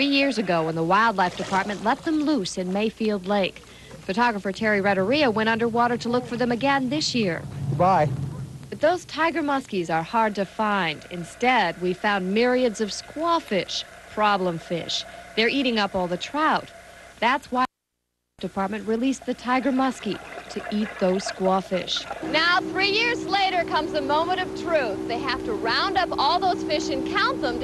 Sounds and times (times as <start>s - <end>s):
Speech: 0.0s - 8.1s, 8.8s - 17.7s, 18.4s - 27.6s
Motorboat, speedboat: 22.2s - 27.6s.